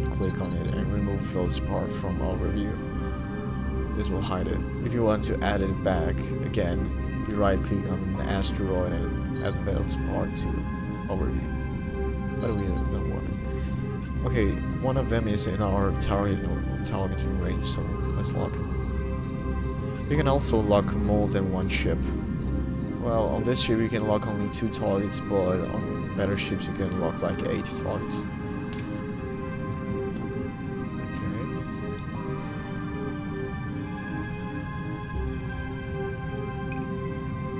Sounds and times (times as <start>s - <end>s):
Speech: 0.0s - 2.8s, 4.0s - 11.4s, 12.4s - 13.3s, 14.2s - 18.6s, 20.1s - 22.0s, 23.0s - 28.2s
Music: 0.0s - 37.5s.